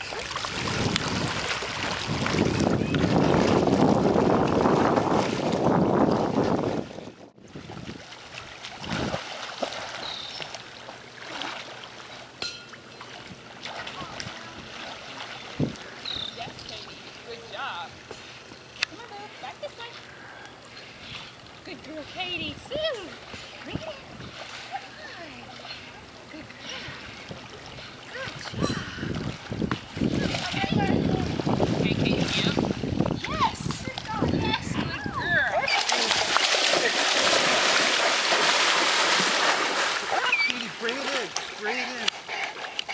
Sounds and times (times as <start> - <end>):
Stream: 0.0 - 42.9.